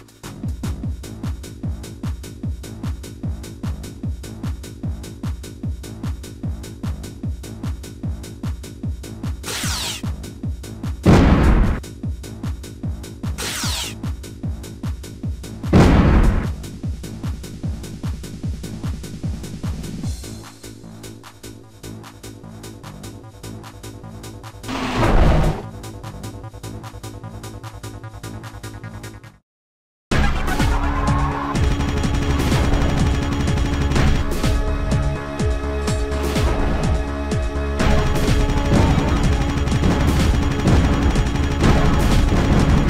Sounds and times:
Music: 0:00.0 - 0:29.4, 0:30.1 - 0:42.9.

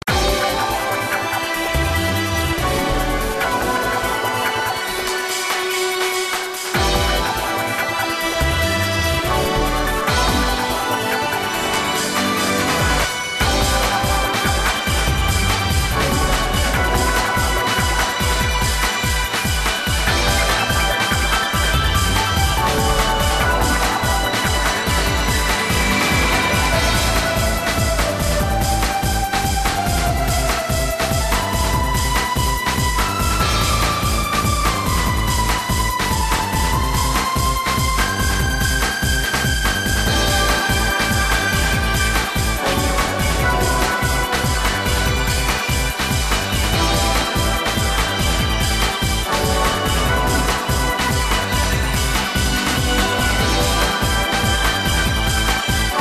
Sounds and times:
Video game music: 0:00.0 - 0:56.0.

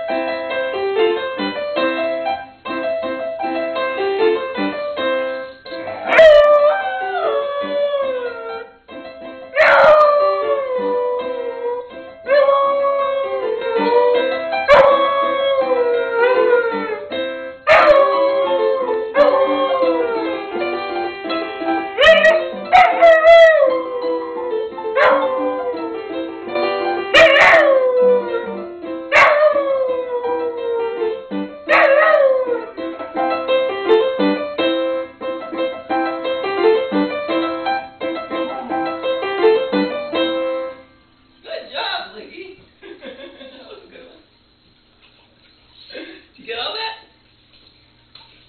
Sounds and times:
Music: 0:00.0 - 0:42.5
Inside, small room: 0:00.0 - 0:48.4.

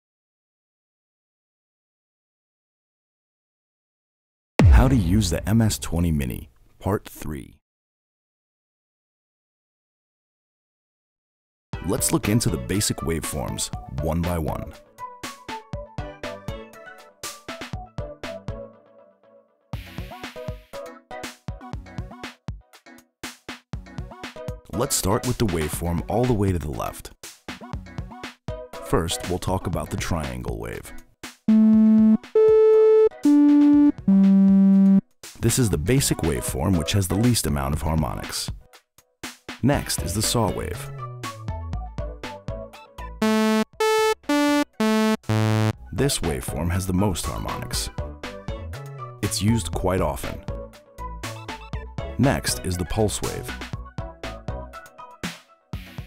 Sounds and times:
Speech: 0:04.6 - 0:07.6, 0:11.8 - 0:14.8, 0:24.7 - 0:27.2, 0:28.9 - 0:31.0, 0:35.4 - 0:38.6, 0:39.6 - 0:40.9, 0:46.0 - 0:48.0, 0:49.2 - 0:50.5, 0:52.2 - 0:53.6
Music: 0:11.8 - 0:56.0.

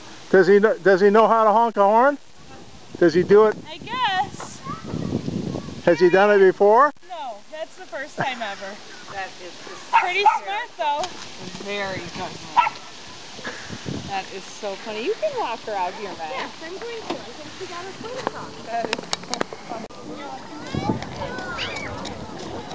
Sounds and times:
Bow-wow: 0:09.6 - 0:10.5, 0:12.6 - 0:12.9.

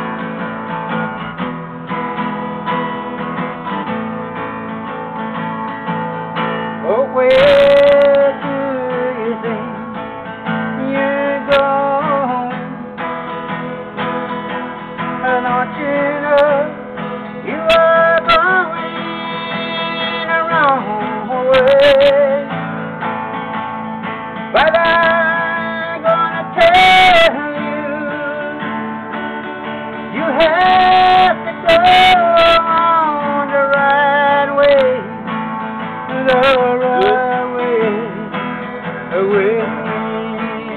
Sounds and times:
Music: 0:00.0 - 0:40.7
Male singing: 0:06.8 - 0:09.8, 0:10.8 - 0:12.8, 0:15.2 - 0:16.8, 0:17.4 - 0:22.5, 0:24.6 - 0:28.7, 0:30.1 - 0:35.2, 0:36.1 - 0:38.4, 0:39.1 - 0:40.7.

